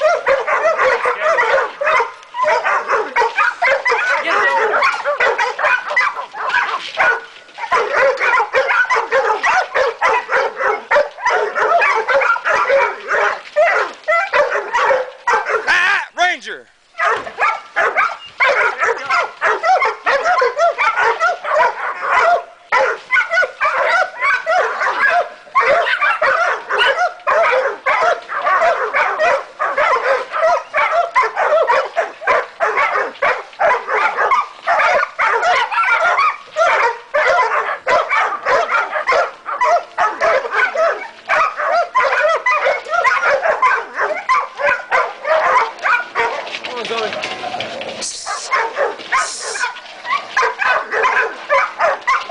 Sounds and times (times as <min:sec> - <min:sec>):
Bark: 0:00.0 - 0:15.8, 0:17.0 - 0:52.3.